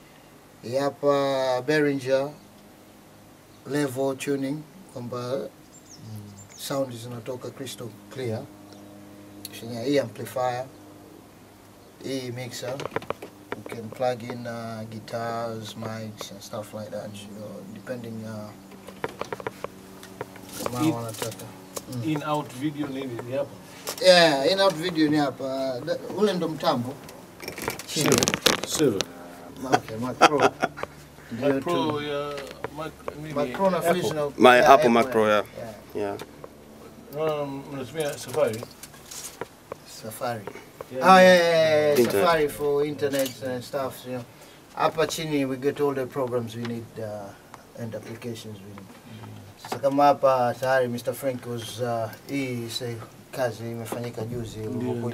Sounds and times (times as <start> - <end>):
Speech: 3.7 - 8.5, 12.0 - 12.8, 13.6 - 18.6, 31.3 - 36.2, 39.9 - 55.1.